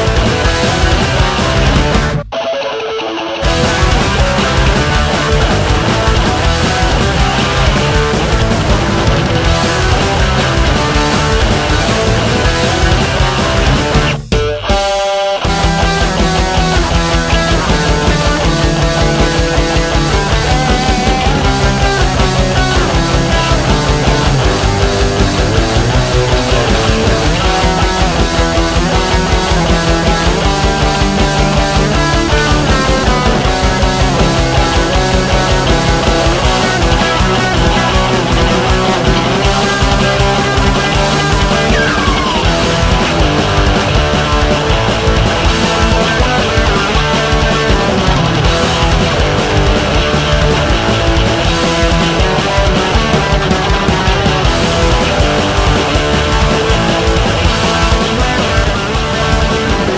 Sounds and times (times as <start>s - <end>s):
Music: 0.0s - 59.9s.